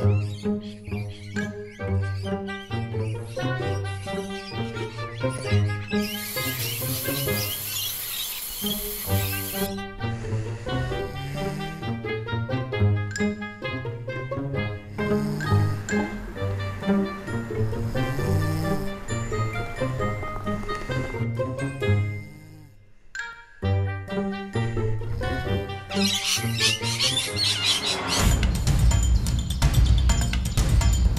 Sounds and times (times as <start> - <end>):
Chirp, tweet: 0.0 - 9.7, 25.9 - 30.9.